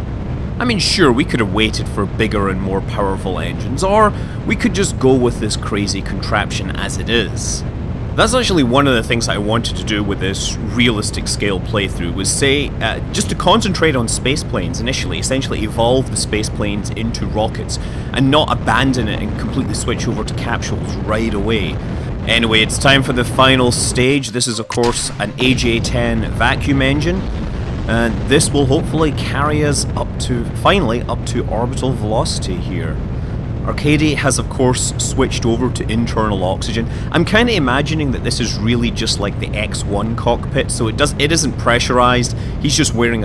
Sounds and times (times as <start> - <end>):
Speech: 0.6 - 7.6, 8.2 - 27.3, 27.9 - 33.0, 33.7 - 43.2.